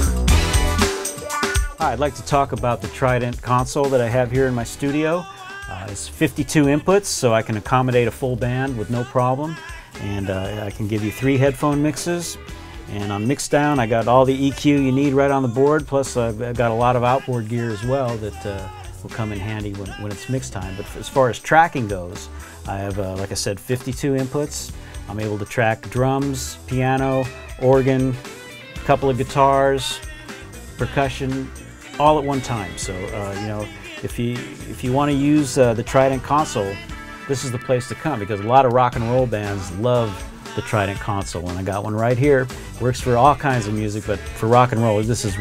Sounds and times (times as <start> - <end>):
Music: 0.0 - 45.4
Speech: 1.8 - 28.2, 28.8 - 30.0, 30.8 - 45.4.